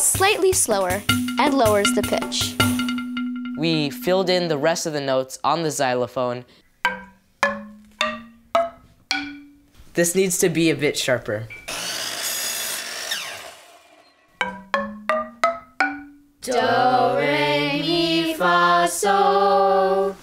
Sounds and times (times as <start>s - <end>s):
Speech: 0.0s - 2.6s, 3.6s - 6.5s, 10.0s - 11.5s
Marimba, xylophone: 0.9s - 4.9s, 6.8s - 9.6s, 14.3s - 17.0s.